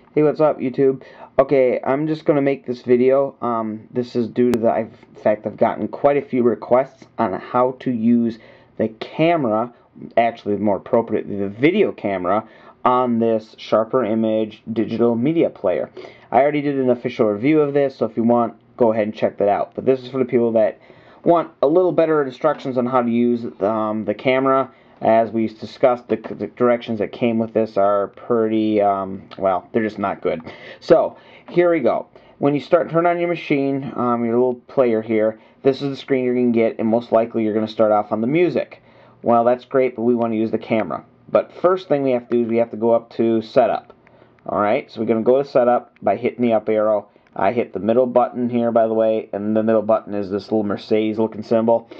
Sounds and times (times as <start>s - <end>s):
Speech: 0.0s - 51.9s.